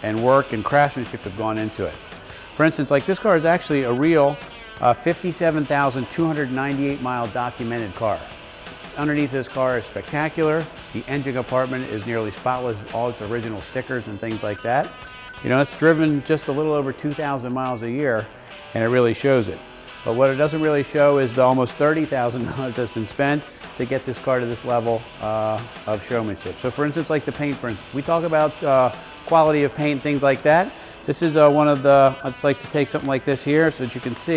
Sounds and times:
Speech: 0:00.0 - 0:02.0, 0:02.6 - 0:08.3, 0:09.0 - 0:14.9, 0:15.5 - 0:34.3
Music: 0:00.0 - 0:34.3.

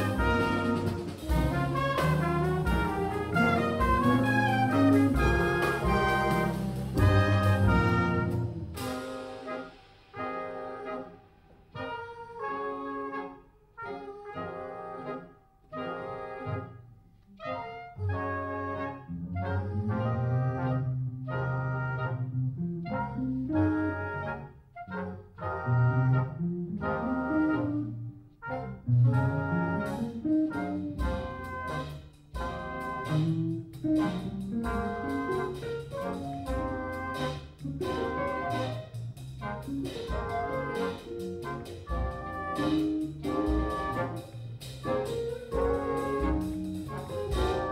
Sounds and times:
Inside, large room or hall: 0:00.0 - 0:47.7
Jazz: 0:00.0 - 0:47.7.

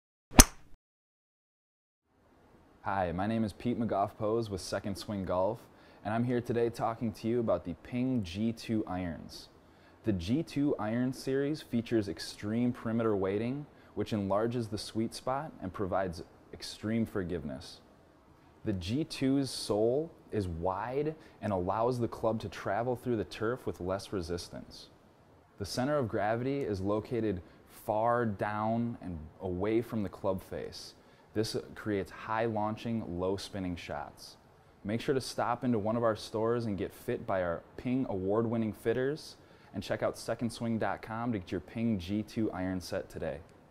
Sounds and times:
Speech: 0:02.8 - 0:17.9, 0:18.6 - 0:25.0, 0:25.6 - 0:43.5.

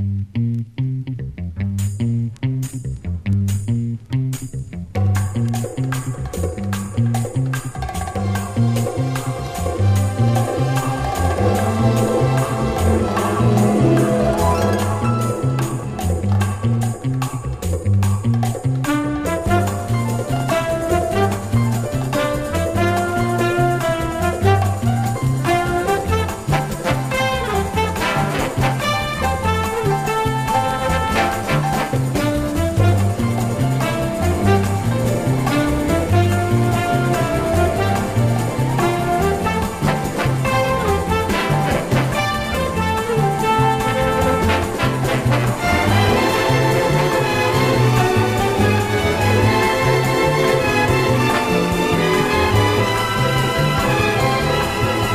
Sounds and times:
Music: 0:00.0 - 0:55.1.

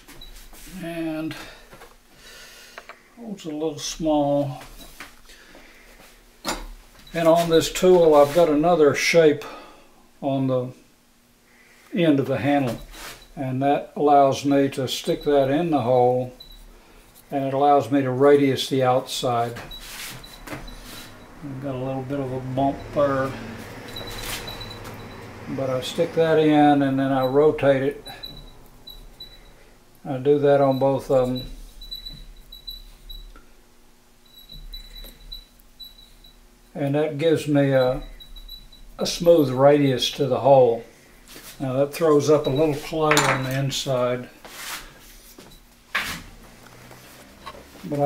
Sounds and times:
Speech: 0:03.2 - 0:04.6, 0:07.2 - 0:09.5, 0:10.2 - 0:10.8, 0:12.0 - 0:12.8, 0:13.4 - 0:16.4, 0:17.3 - 0:19.7, 0:21.4 - 0:23.4, 0:25.5 - 0:28.0, 0:30.0 - 0:31.5, 0:36.8 - 0:38.1, 0:39.0 - 0:40.9, 0:41.6 - 0:44.3, 0:47.8 - 0:48.0.

